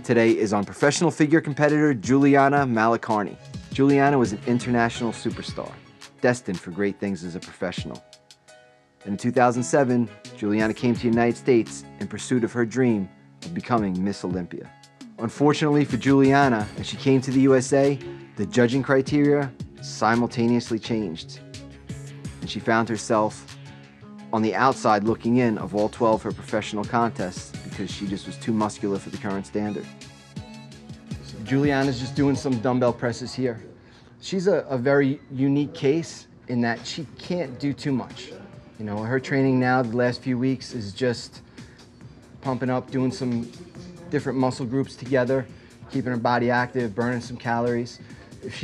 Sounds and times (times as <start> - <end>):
Speech: 0.0 - 8.0, 9.0 - 21.4, 22.4 - 23.5, 24.3 - 29.9, 31.3 - 41.4, 42.4 - 48.6
Music: 0.0 - 48.6.